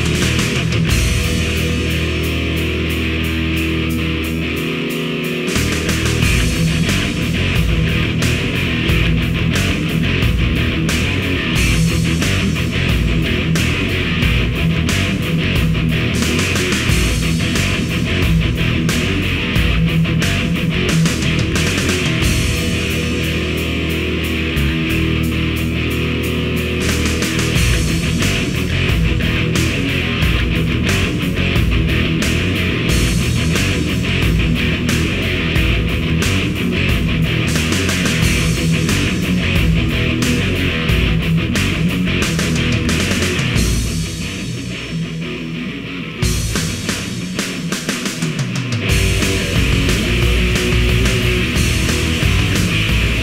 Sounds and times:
Punk rock: 0.0 - 53.2.

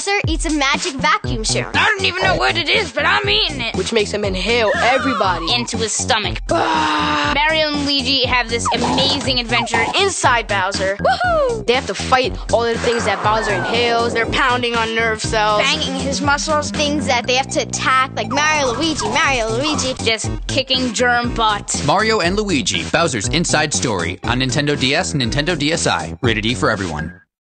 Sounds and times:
Speech: 0.0 - 6.6, 7.2 - 27.1
Music: 0.0 - 27.3.

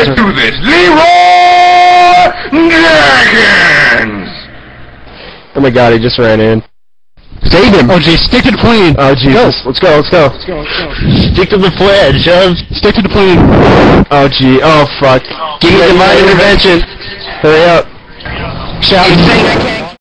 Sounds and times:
Speech: 0.0 - 4.5, 5.6 - 6.7, 7.4 - 13.4, 14.1 - 20.0.

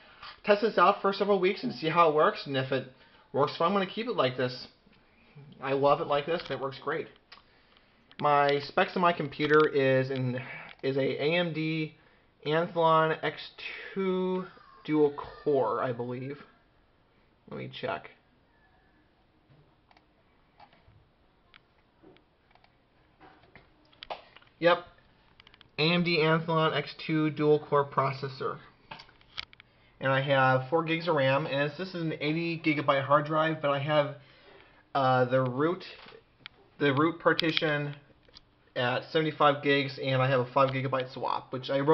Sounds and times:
Inside, small room: 0.0 - 41.9
Speech: 0.4 - 4.8, 5.4 - 7.2, 8.2 - 16.6, 17.5 - 18.2, 24.6 - 24.9, 25.8 - 28.7, 30.0 - 34.2, 35.0 - 36.2, 36.8 - 38.1, 38.8 - 41.9.

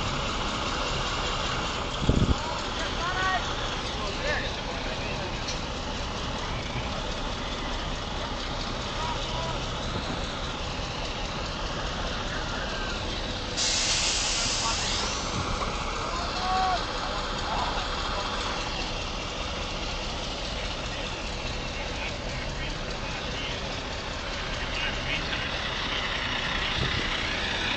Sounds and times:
Truck: 0.0 - 27.7
Speech: 2.3 - 5.6, 8.9 - 9.8, 14.2 - 19.1, 20.3 - 25.9.

